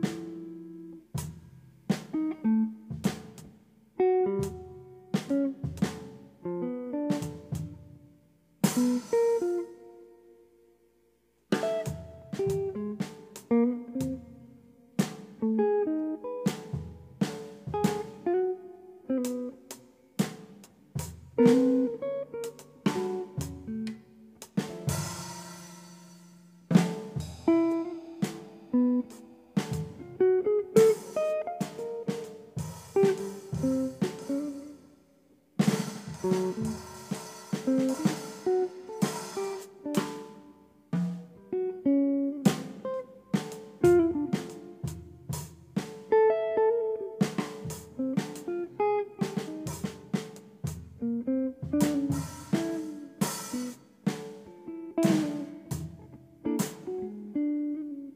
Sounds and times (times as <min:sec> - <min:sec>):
Drum kit: 0:00.0 - 0:10.1, 0:11.4 - 0:57.9
Rimshot: 0:02.9 - 0:03.5, 0:04.4 - 0:06.2, 0:07.1 - 0:07.8, 0:08.6 - 0:09.7, 0:11.6 - 0:14.4, 0:15.0 - 0:15.4, 0:16.4 - 0:18.4, 0:19.2 - 0:34.8, 0:35.6 - 0:40.4, 0:42.5 - 0:46.2, 0:47.2 - 0:48.5, 0:51.6 - 0:57.0.